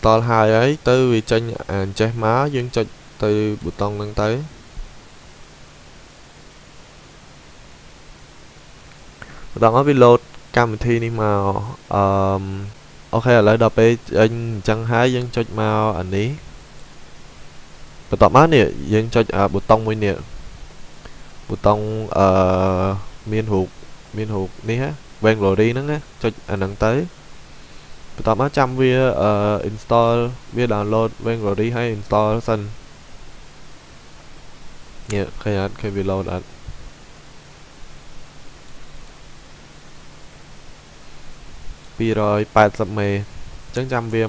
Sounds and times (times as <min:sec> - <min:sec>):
Speech: 0:00.0 - 0:04.5, 0:09.6 - 0:16.4, 0:18.1 - 0:20.3, 0:21.5 - 0:27.1, 0:28.2 - 0:32.8, 0:35.1 - 0:36.5, 0:42.0 - 0:44.2.